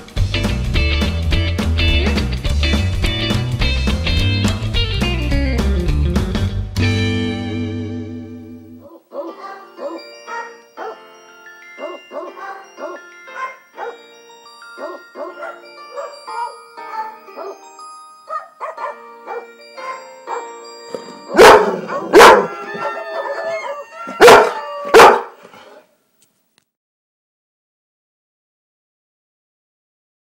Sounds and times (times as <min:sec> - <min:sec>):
Bow-wow: 0:08.8 - 0:11.0, 0:11.8 - 0:14.0, 0:18.3 - 0:20.5, 0:21.3 - 0:25.9
Yip: 0:08.8 - 0:11.0, 0:21.4 - 0:25.4
Whimper (dog): 0:21.8 - 0:25.8.